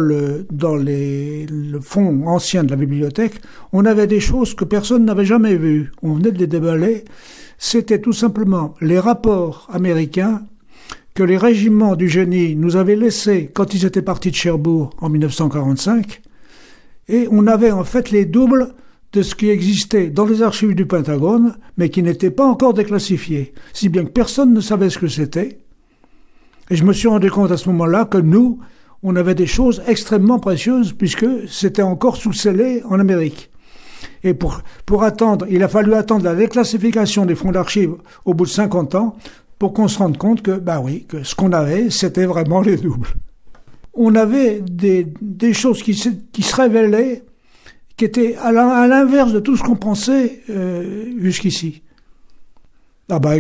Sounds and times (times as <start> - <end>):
Speech: 0.0 - 10.6, 11.2 - 16.2, 17.1 - 25.6, 26.7 - 33.5, 34.2 - 43.3, 43.9 - 47.3, 47.9 - 51.9, 53.1 - 53.4.